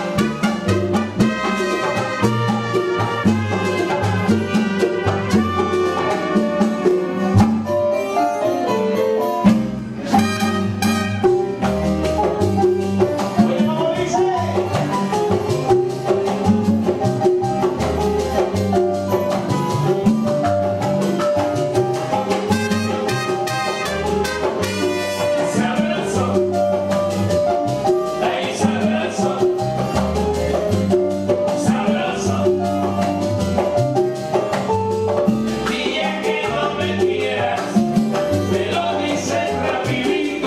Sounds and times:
Dance music: 0:22.3 - 0:26.2.

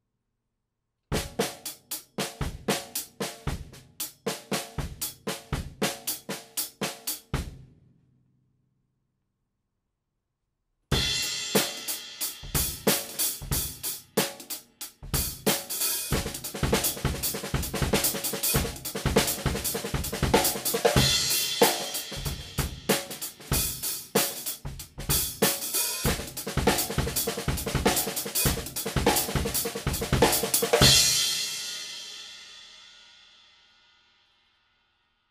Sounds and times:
Drum kit: 0:01.2 - 0:07.8, 0:10.9 - 0:32.9
Drum roll: 0:11.0 - 0:32.5
Bass drum: 0:12.4 - 0:13.8, 0:15.0 - 0:23.8, 0:24.6 - 0:31.2.

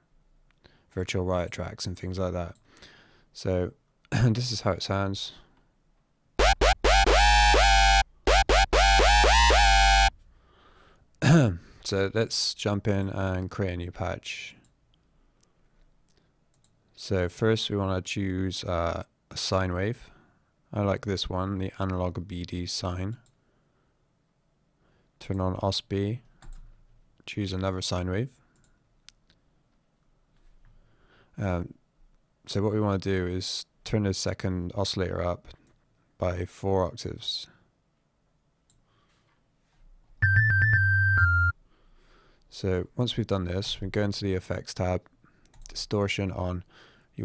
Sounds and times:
Speech: 0:00.9 - 0:02.6, 0:03.4 - 0:05.4, 0:11.2 - 0:14.6, 0:17.0 - 0:20.1, 0:20.7 - 0:23.2, 0:25.2 - 0:26.2, 0:27.2 - 0:28.4, 0:31.4 - 0:31.8, 0:32.5 - 0:35.6, 0:36.2 - 0:37.6, 0:42.5 - 0:45.1, 0:45.7 - 0:47.2.

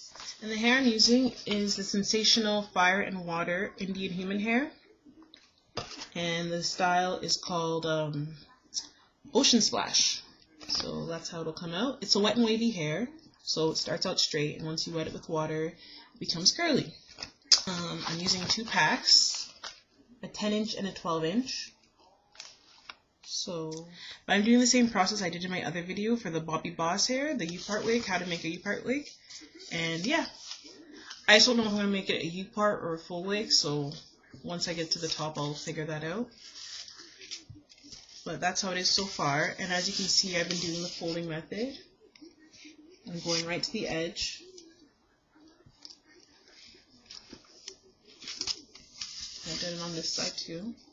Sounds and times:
Speech: 0:00.3 - 0:04.8, 0:06.2 - 0:17.0, 0:17.6 - 0:19.6, 0:20.2 - 0:21.8, 0:23.3 - 0:37.4, 0:38.2 - 0:41.9, 0:42.5 - 0:44.8, 0:49.4 - 0:50.9.

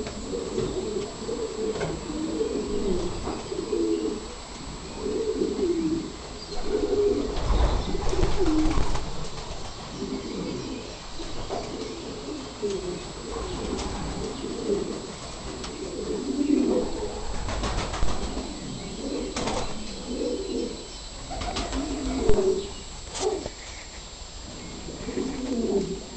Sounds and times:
Bird flight, flapping wings: 0:07.4 - 0:09.9, 0:17.3 - 0:18.5, 0:19.4 - 0:19.8, 0:21.4 - 0:22.0.

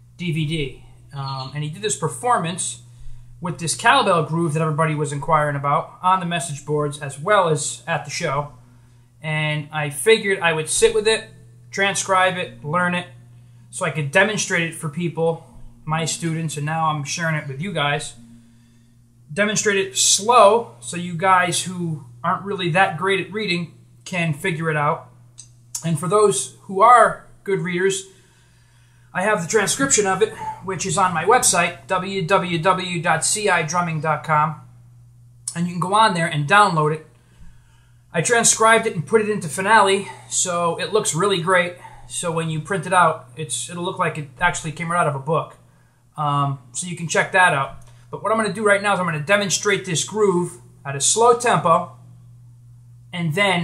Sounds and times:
Speech: 0:00.2 - 0:08.6, 0:09.2 - 0:18.2, 0:19.3 - 0:25.1, 0:25.8 - 0:28.1, 0:29.1 - 0:34.6, 0:35.5 - 0:37.1, 0:38.1 - 0:45.6, 0:46.2 - 0:52.0, 0:53.2 - 0:53.6.

